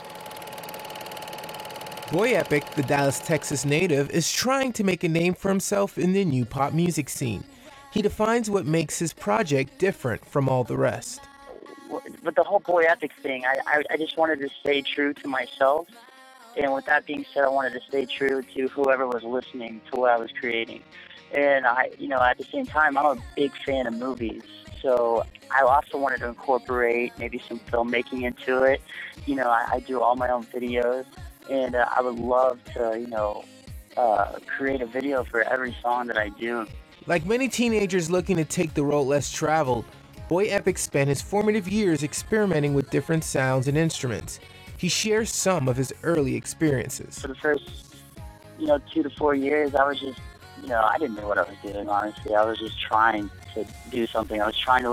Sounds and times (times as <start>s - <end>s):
Speech: 2.1s - 15.8s, 16.6s - 33.4s, 34.0s - 47.7s, 48.6s - 54.9s.